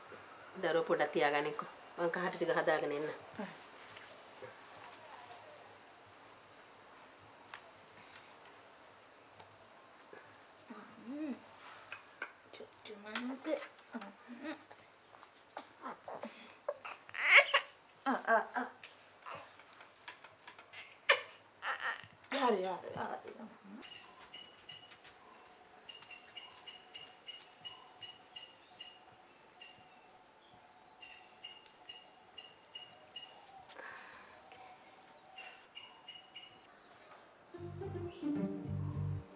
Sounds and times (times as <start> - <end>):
Speech: 0.6 - 3.6, 22.3 - 23.8.